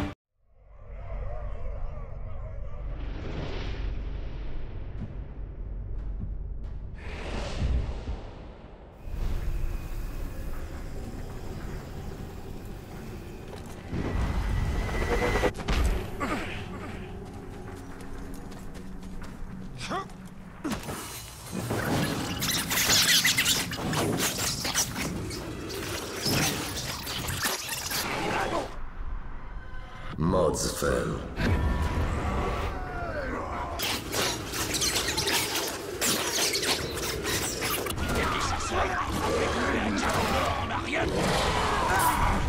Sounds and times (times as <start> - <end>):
Speech: 30.2 - 31.4.